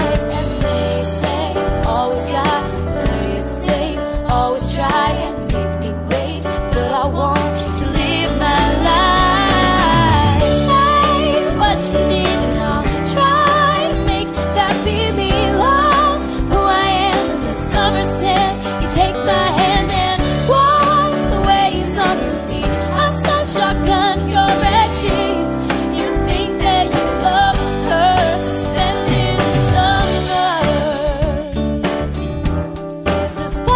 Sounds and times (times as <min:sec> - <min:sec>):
Music: 0:00.0 - 0:33.7.